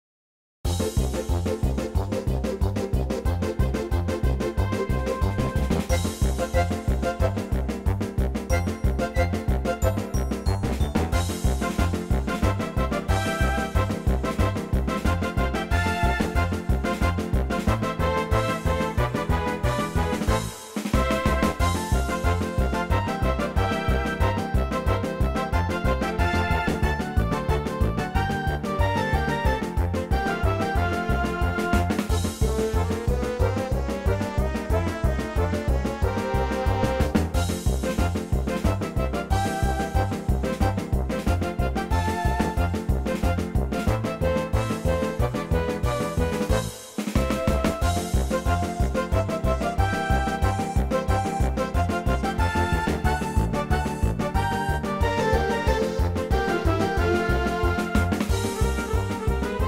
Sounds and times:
Music: 0.6s - 59.6s.

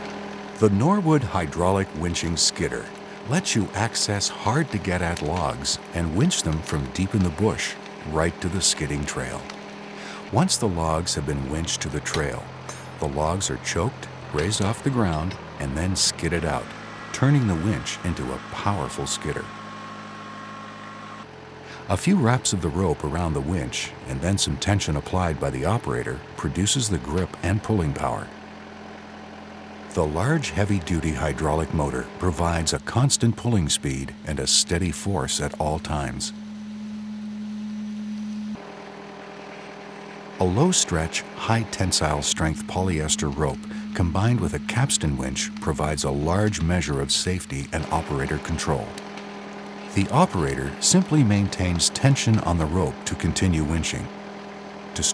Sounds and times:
Vehicle: 0.0s - 55.1s
Speech: 0.6s - 9.5s, 10.2s - 19.5s, 21.7s - 28.3s, 29.9s - 36.4s, 40.4s - 49.0s, 49.9s - 54.1s.

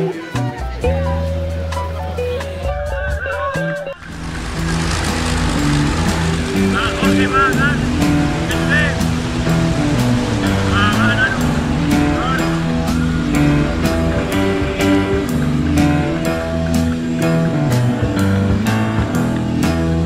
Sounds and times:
Music: 0.0s - 20.0s
Outside, rural or natural: 3.8s - 20.0s
Speech: 6.8s - 7.8s, 8.5s - 9.0s, 10.7s - 11.4s.

